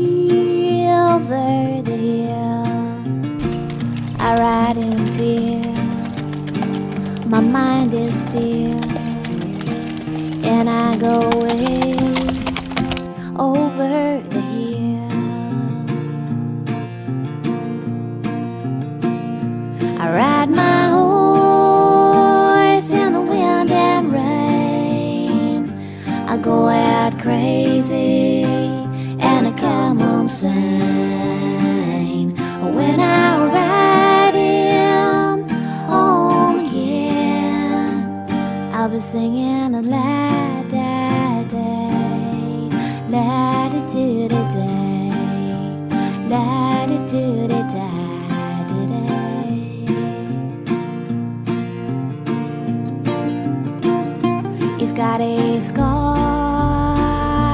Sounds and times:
Music: 0.0 - 57.5
Clip-clop: 3.4 - 13.1.

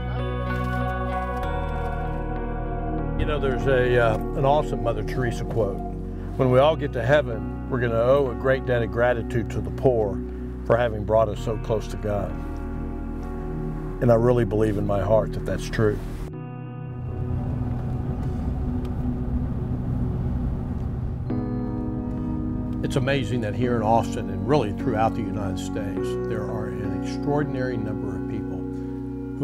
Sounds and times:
Music: 0.0 - 29.4
Speech: 3.2 - 5.8, 6.4 - 12.3, 14.0 - 16.0, 22.9 - 28.6.

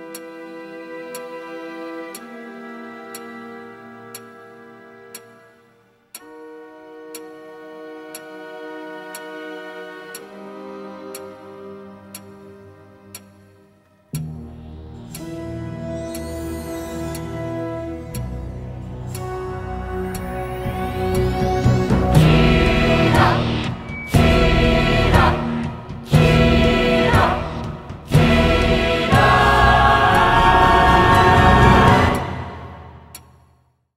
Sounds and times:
Theme music: 14.1 - 33.4
Choir: 19.4 - 33.2.

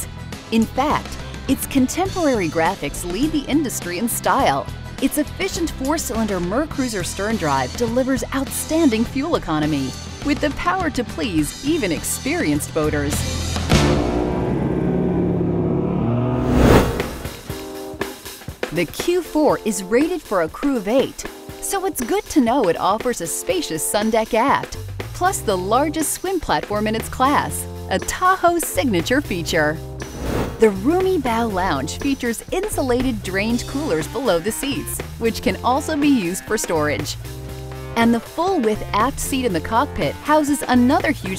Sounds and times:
Speech: 0.0 - 13.3, 18.7 - 29.8, 30.6 - 37.2, 38.0 - 41.3
Music: 0.0 - 41.3.

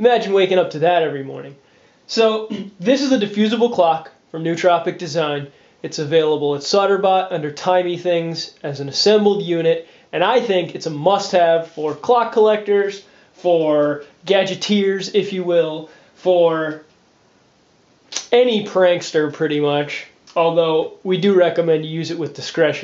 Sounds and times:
Speech: 0.0 - 16.9, 18.1 - 22.8.

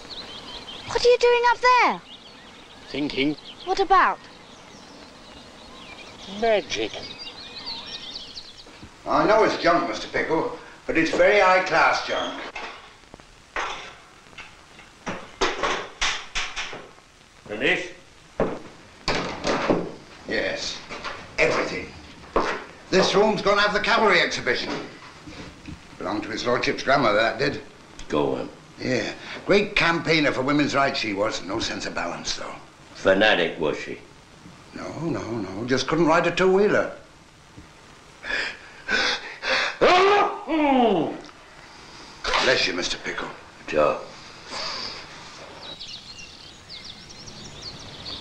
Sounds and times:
Outside, rural or natural: 0.0 - 17.9, 34.1 - 48.2
Speech: 9.1 - 12.5, 17.5 - 18.0, 42.3 - 44.1.

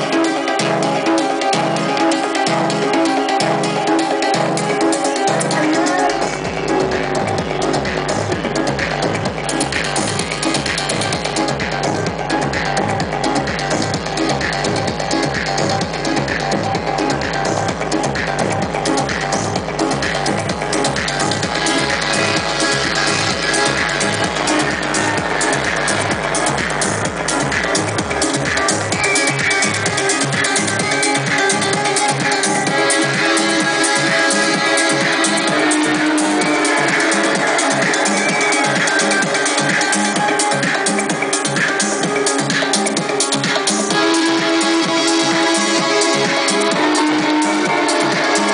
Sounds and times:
Music: 0.0 - 48.5.

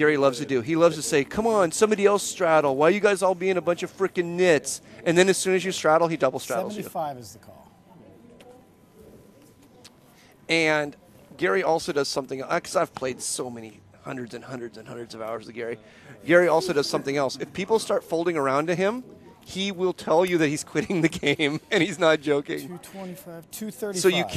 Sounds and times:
Speech: 0.0 - 24.3.

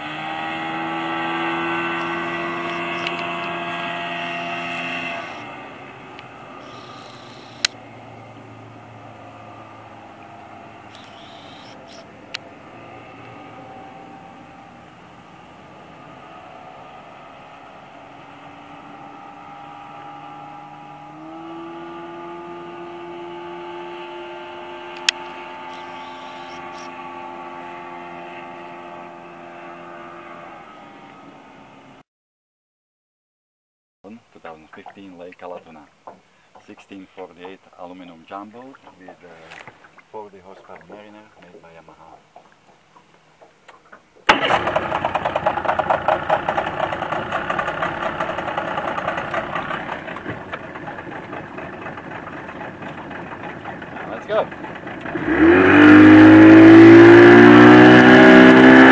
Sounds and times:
Motorboat, speedboat: 0.0 - 32.0, 34.5 - 58.9.

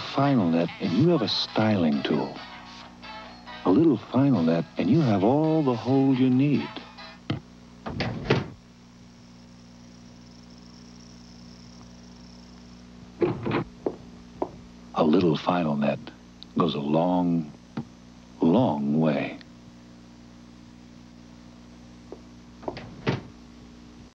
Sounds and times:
Speech: 0.0 - 2.4, 3.7 - 6.8, 15.0 - 17.6, 18.4 - 19.5.

